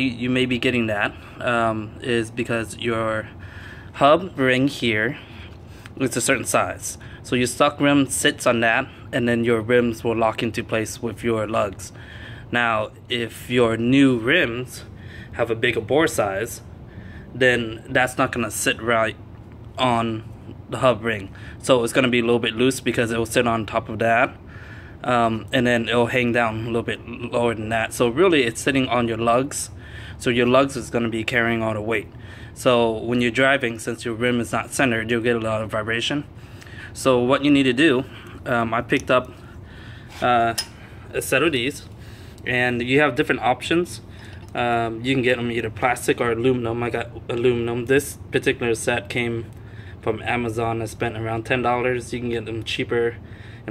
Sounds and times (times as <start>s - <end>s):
Speech: 0.0s - 3.4s, 4.0s - 5.2s, 6.0s - 16.7s, 17.4s - 19.2s, 19.8s - 24.4s, 25.0s - 36.3s, 37.0s - 39.4s, 40.2s - 41.9s, 42.5s - 53.7s.